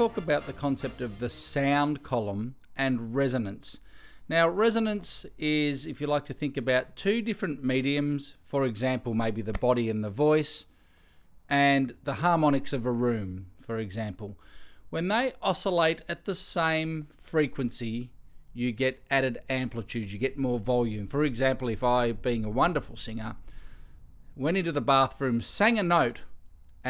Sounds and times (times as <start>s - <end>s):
Speech: 0.0s - 10.7s, 11.5s - 23.4s, 24.4s - 26.8s.